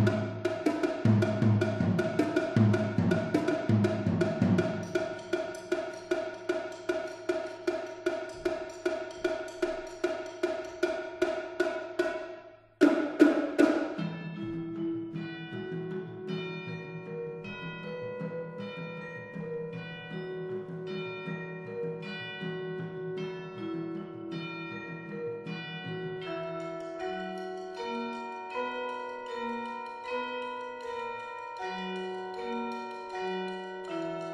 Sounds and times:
Music: 0.0 - 34.3.

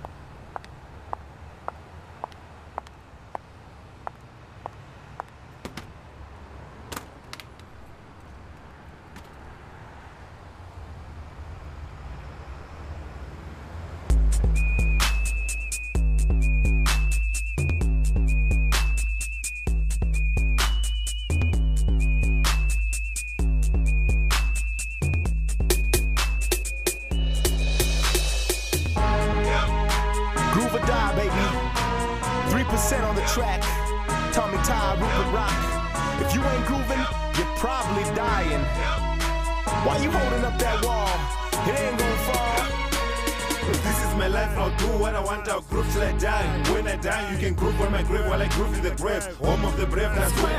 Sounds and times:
Music: 14.1 - 50.5.

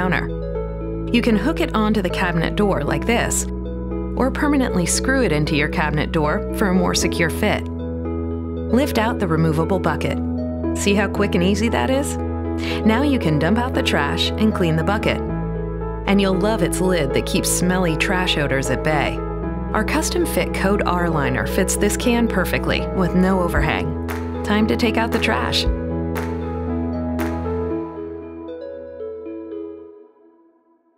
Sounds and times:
Speech: 0.0 - 0.3, 1.1 - 3.5, 4.2 - 7.6, 8.7 - 10.2, 10.8 - 15.3, 16.1 - 19.2, 19.8 - 25.8
Music: 0.0 - 30.9.

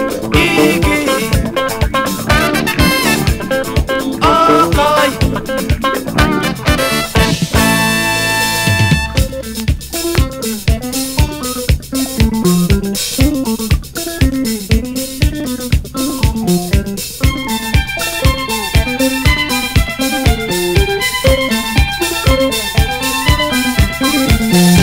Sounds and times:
Blues: 0.0 - 24.8
Jazz: 0.0 - 24.8.

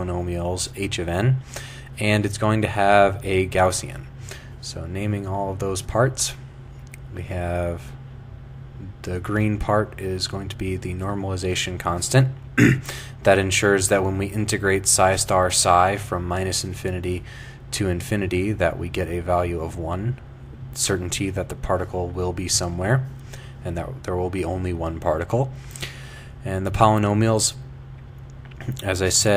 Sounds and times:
Speech: 0.0 - 1.4, 2.0 - 6.4, 7.0 - 8.0, 8.8 - 12.4, 13.2 - 20.2, 20.8 - 25.6, 26.4 - 27.6, 28.6 - 29.3.

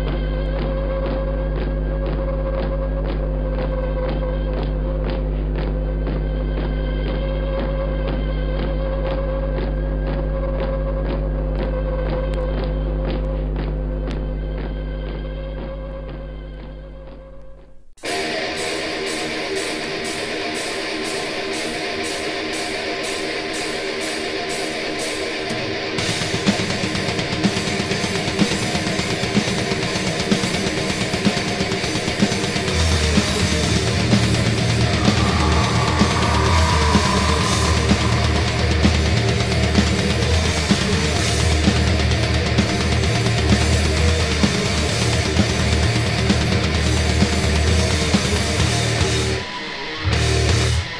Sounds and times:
Music: 0.0 - 50.9.

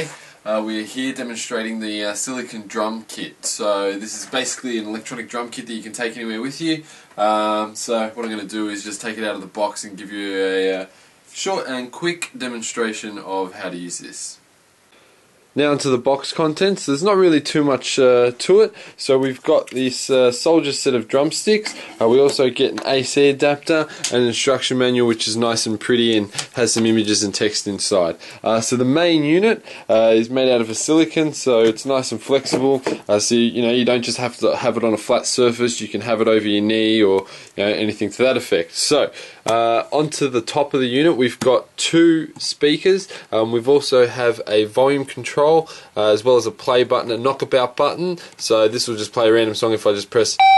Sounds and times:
Speech: 0.0 - 14.5, 15.6 - 50.4.

